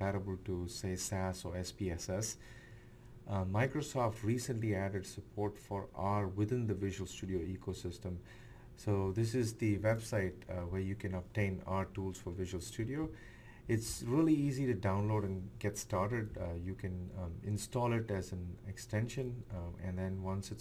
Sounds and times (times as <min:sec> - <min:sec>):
Speech: 0:00.0 - 0:02.4, 0:03.3 - 0:20.6.